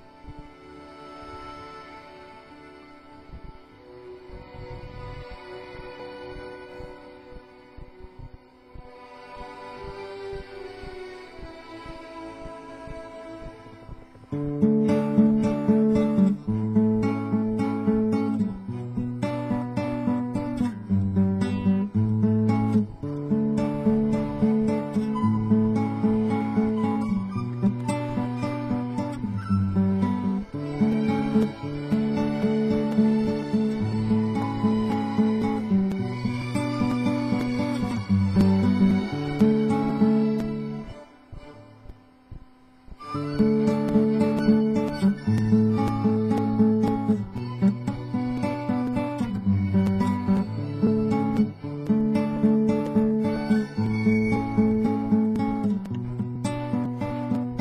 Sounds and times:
Guitar: 0:00.0 - 0:57.6.

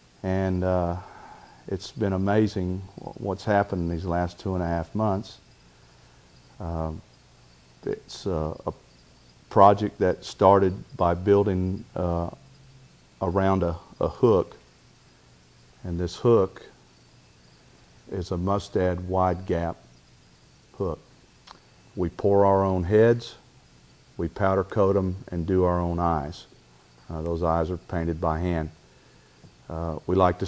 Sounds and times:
Speech: 0:00.2 - 0:05.4, 0:06.6 - 0:07.0, 0:07.8 - 0:08.8, 0:09.5 - 0:12.4, 0:13.2 - 0:14.6, 0:15.8 - 0:16.8, 0:18.1 - 0:19.8, 0:20.8 - 0:21.0, 0:22.0 - 0:23.4, 0:24.2 - 0:26.5, 0:27.1 - 0:28.8, 0:29.7 - 0:30.4.

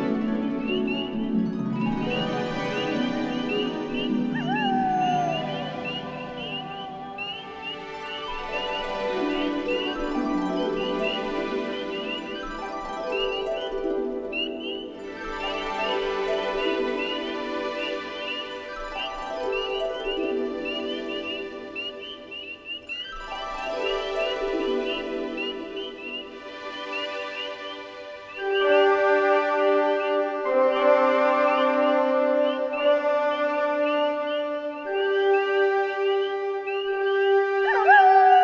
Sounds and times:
Tender music: 0:00.0 - 0:38.4.

